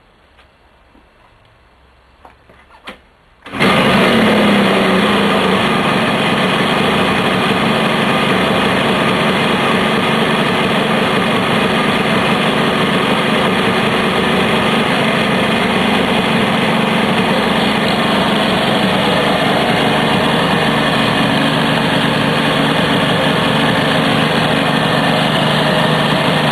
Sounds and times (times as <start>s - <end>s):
Vehicle: 0.0s - 26.5s
Medium engine (mid frequency): 3.4s - 26.5s
Idling: 3.5s - 26.5s.